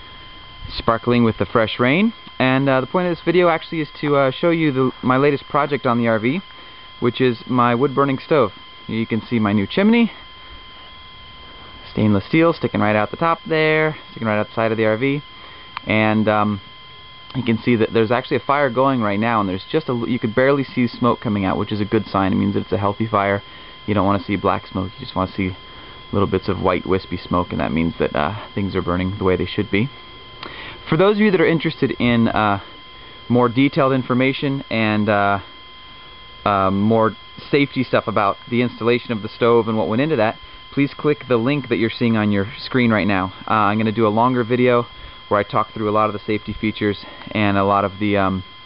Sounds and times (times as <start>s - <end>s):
Speech: 0.7s - 10.2s, 11.9s - 16.6s, 17.3s - 30.0s, 30.9s - 32.7s, 33.3s - 35.5s, 36.4s - 48.5s.